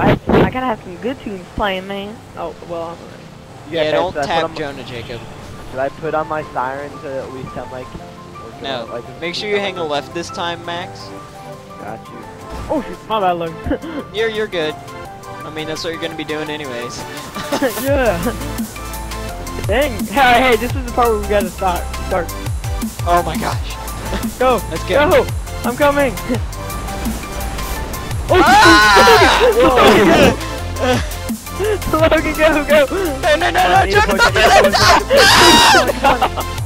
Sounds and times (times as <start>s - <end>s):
Music: 0.0s - 36.6s
Speech: 3.7s - 7.9s, 17.7s - 18.3s, 19.7s - 22.3s, 23.0s - 23.7s, 24.3s - 26.4s, 28.3s - 31.0s, 31.9s - 35.1s.